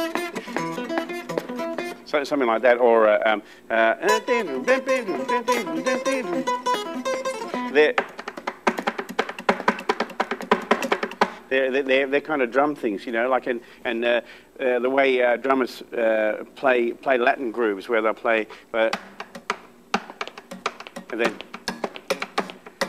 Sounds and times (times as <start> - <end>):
Music: 0.0 - 2.1, 4.1 - 11.4, 18.9 - 22.8
Speech: 2.1 - 4.5, 7.7 - 8.0, 11.5 - 19.0, 21.1 - 21.4.